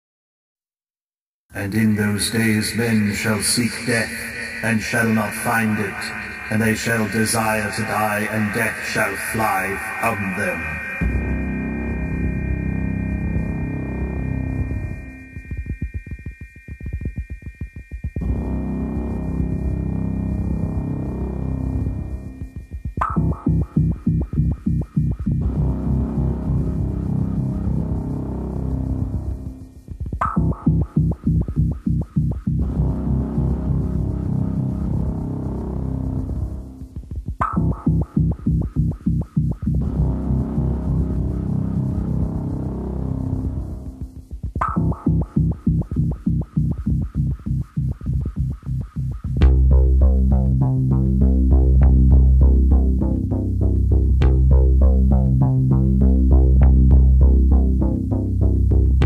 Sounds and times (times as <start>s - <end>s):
Music: 1.5s - 59.0s
Throbbing: 4.1s - 59.0s.